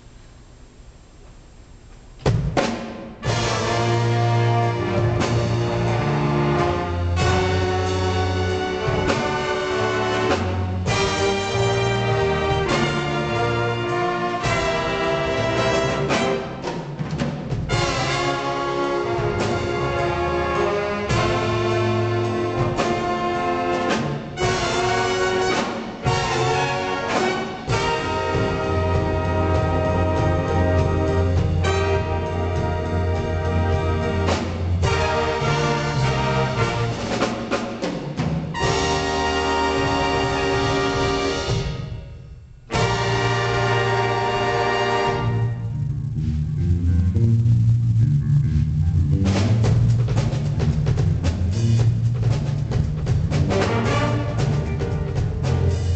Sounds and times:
Music: 1.9s - 55.9s.

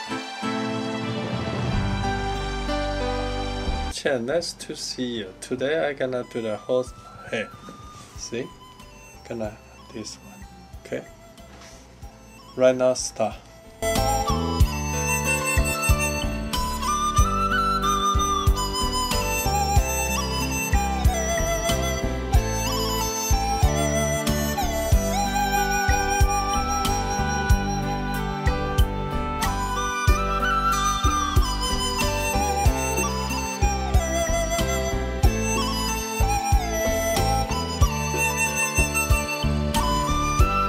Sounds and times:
Music: 0.0s - 40.6s
Speech: 4.0s - 7.6s, 8.2s - 8.5s, 9.3s - 11.1s, 12.6s - 13.5s.

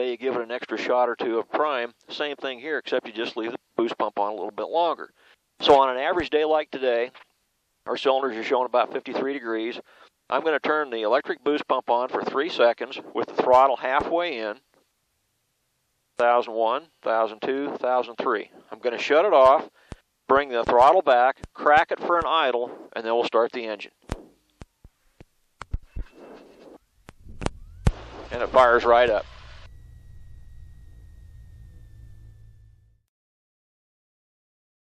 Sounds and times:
Speech: 0.0s - 7.2s, 7.9s - 14.6s, 16.2s - 19.7s, 20.3s - 24.0s, 28.3s - 29.2s.

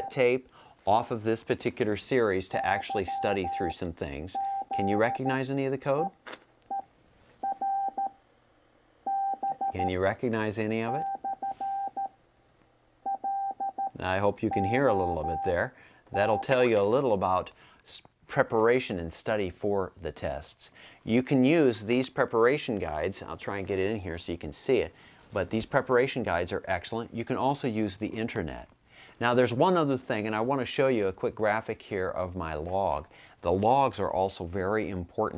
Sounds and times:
Speech: 0.0s - 6.2s, 9.7s - 11.1s, 14.0s - 35.3s
Inside, small room: 0.0s - 35.3s.

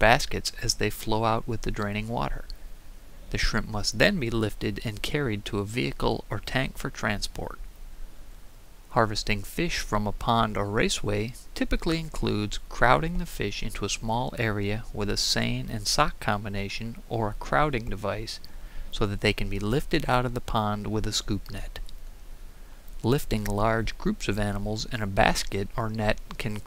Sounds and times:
Speech: 0.0s - 2.5s, 3.3s - 7.6s, 8.9s - 18.4s, 19.0s - 21.8s, 23.0s - 26.6s.

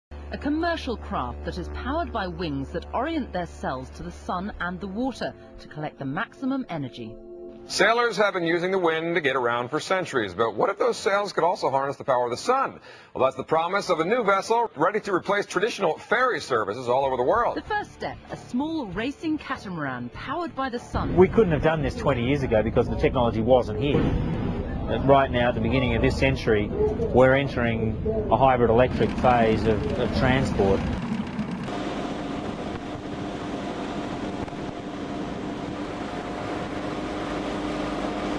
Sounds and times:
Speech: 0.4s - 7.1s, 7.7s - 24.1s, 24.9s - 30.8s
Motorboat, speedboat: 28.4s - 38.3s.

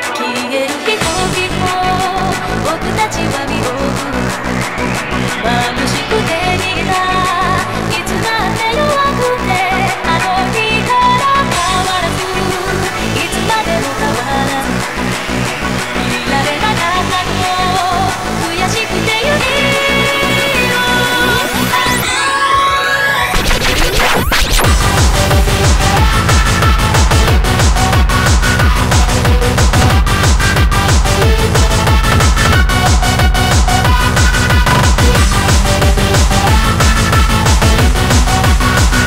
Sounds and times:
Dance music: 0.0s - 39.0s
Techno: 0.0s - 39.0s.

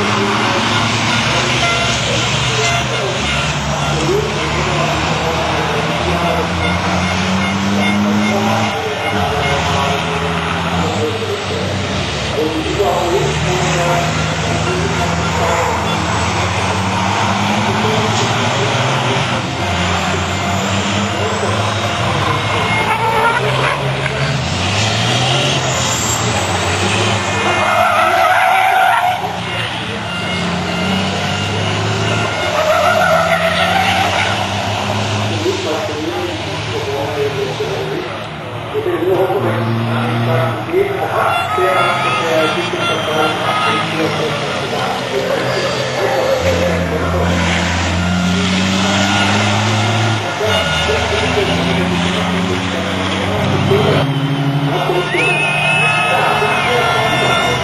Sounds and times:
Speech: 0.0s - 7.0s, 7.6s - 24.4s, 25.3s - 49.2s, 50.2s - 57.6s.

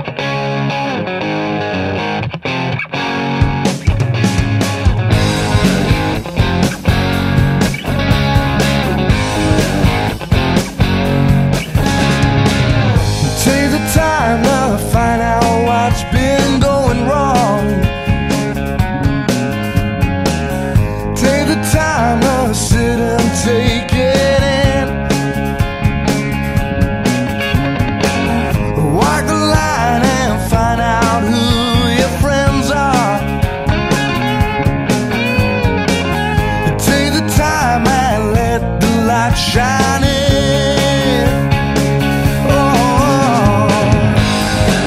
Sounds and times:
Guitar: 0.0s - 44.8s.

